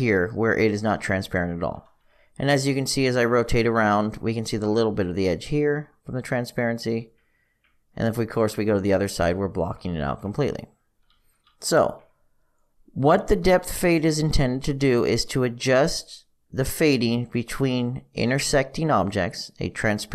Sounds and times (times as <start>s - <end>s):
Speech: 0.0s - 7.1s, 8.0s - 10.8s, 11.6s - 12.1s, 13.0s - 20.1s.